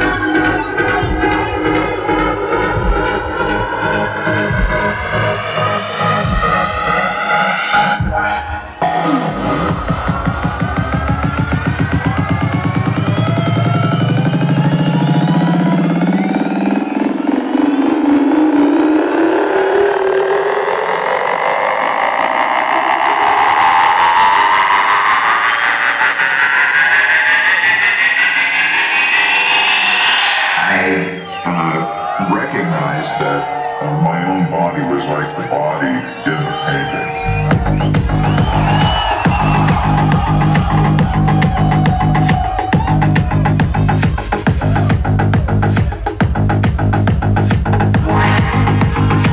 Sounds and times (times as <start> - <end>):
House music: 0.0 - 49.3
Trance music: 0.0 - 49.3.